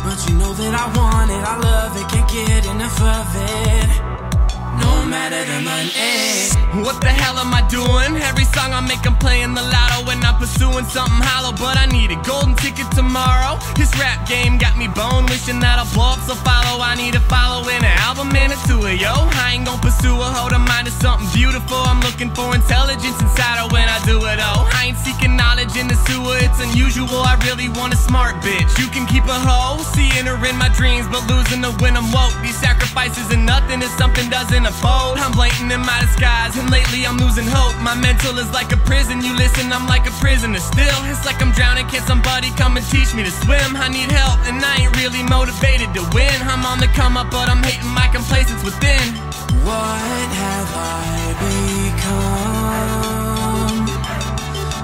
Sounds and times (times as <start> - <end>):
Soundtrack music: 0.0 - 54.8.